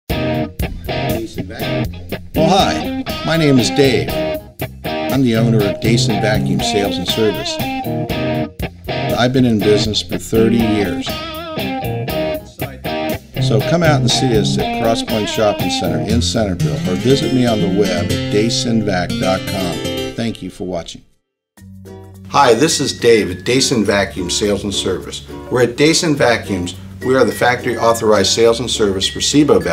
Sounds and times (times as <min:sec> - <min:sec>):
Electric guitar: 0:00.1 - 0:20.2.